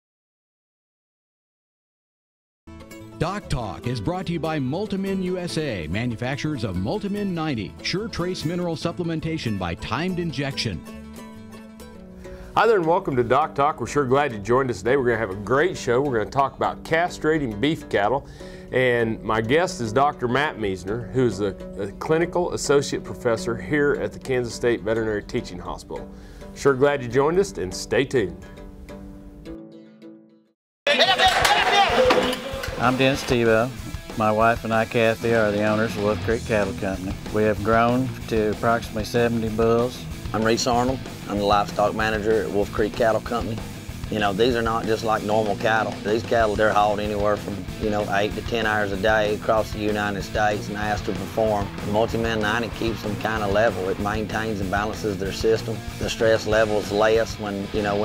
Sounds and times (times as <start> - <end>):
Music: 2.7 - 58.0
Speech: 3.2 - 10.9, 12.6 - 26.0, 26.6 - 28.4, 32.8 - 58.0.